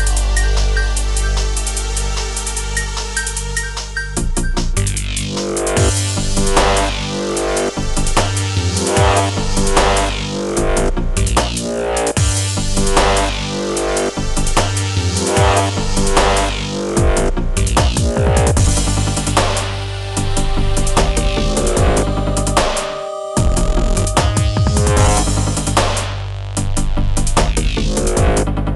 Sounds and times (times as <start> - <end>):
Drum: 0.0 - 28.7.